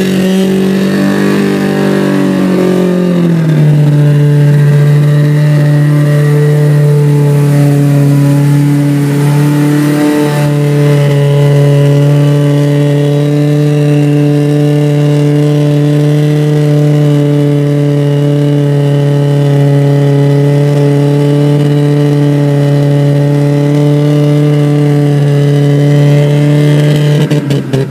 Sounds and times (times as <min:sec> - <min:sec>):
Accelerating, revving, vroom: 0:00.0 - 0:27.9
Car: 0:00.0 - 0:27.9.